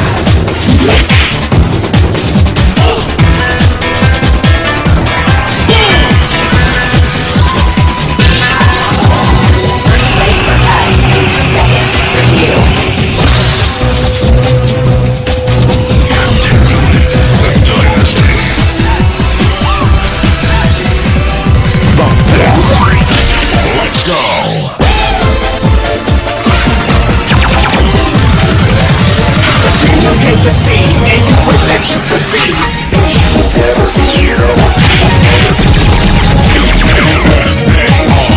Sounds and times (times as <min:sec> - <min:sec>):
Dance music: 0:00.0 - 0:38.3.